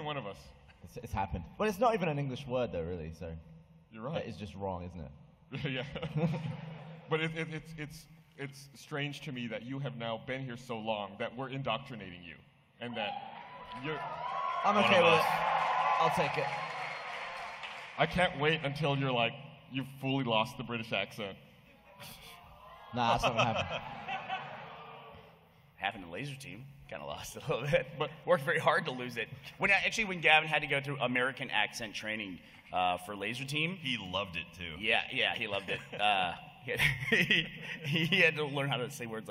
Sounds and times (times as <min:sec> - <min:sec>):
Speech: 0:00.0 - 0:06.0, 0:07.1 - 0:13.2, 0:13.8 - 0:15.4, 0:18.0 - 0:21.4, 0:25.8 - 0:37.0, 0:37.9 - 0:39.3.